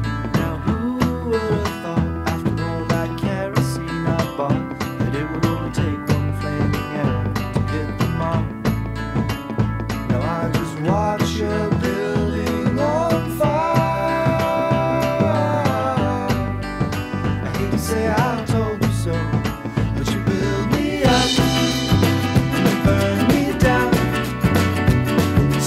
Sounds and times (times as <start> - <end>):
Tender music: 3.8 - 25.6.